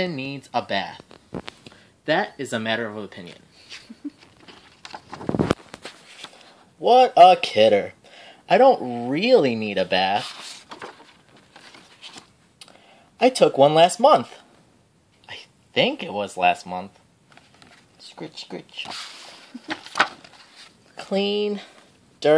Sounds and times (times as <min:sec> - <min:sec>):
Speech: 0:00.0 - 0:01.0, 0:02.1 - 0:03.4, 0:06.8 - 0:10.3, 0:13.2 - 0:14.5, 0:15.3 - 0:17.0, 0:18.0 - 0:19.0, 0:21.0 - 0:22.3.